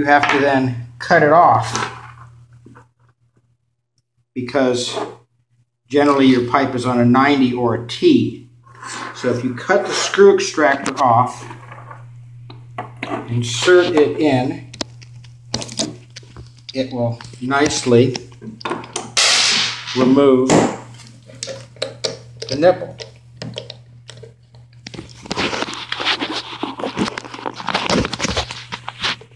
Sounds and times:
Speech: 0:00.0 - 0:01.8, 0:04.4 - 0:05.2, 0:05.9 - 0:08.5, 0:09.2 - 0:11.5, 0:13.3 - 0:14.7, 0:16.7 - 0:18.3, 0:20.0 - 0:20.6, 0:22.5 - 0:23.0.

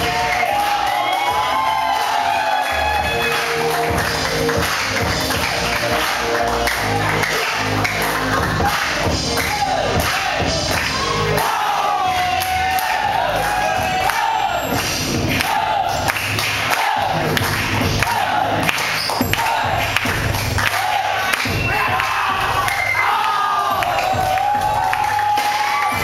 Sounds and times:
Music: 0:00.0 - 0:26.0.

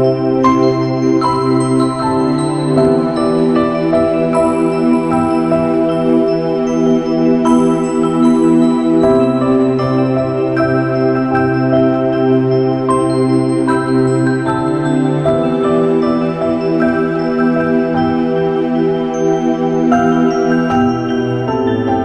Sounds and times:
New-age music: 0:00.0 - 0:22.0.

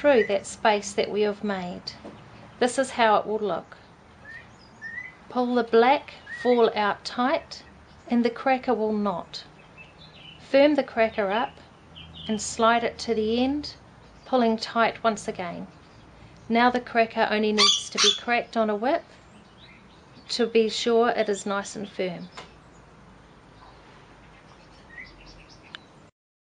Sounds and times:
Speech: 0:00.0 - 0:02.0, 0:02.6 - 0:03.8, 0:05.3 - 0:09.5, 0:10.4 - 0:11.6, 0:12.3 - 0:15.7, 0:16.5 - 0:19.1, 0:20.2 - 0:22.4.

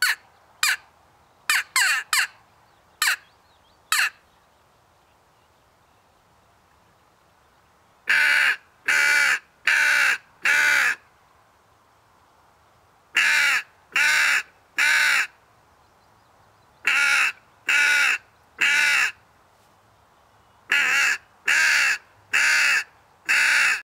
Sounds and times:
Caw: 0:08.1 - 0:11.0, 0:13.2 - 0:15.4, 0:16.9 - 0:19.2, 0:20.7 - 0:23.8.

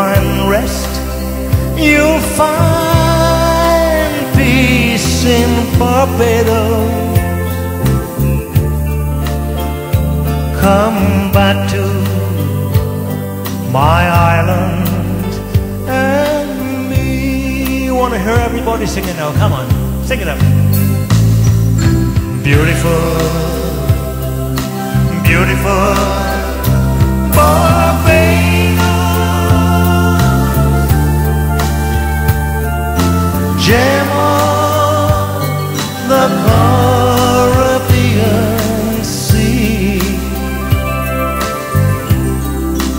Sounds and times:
Music: 0:00.0 - 0:42.9.

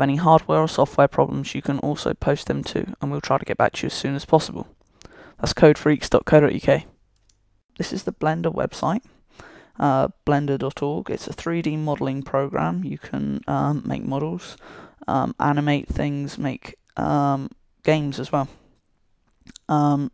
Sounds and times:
Speech: 0:00.0 - 0:04.7, 0:05.4 - 0:06.9, 0:07.8 - 0:09.0, 0:09.8 - 0:18.6, 0:19.5 - 0:20.1.

